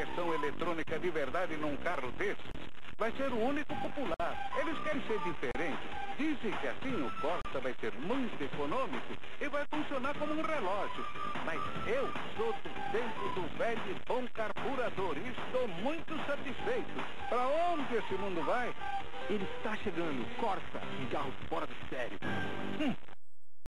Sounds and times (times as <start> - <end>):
Speech: 0.0 - 2.4, 3.0 - 22.2, 22.8 - 23.0
Music: 0.0 - 23.1.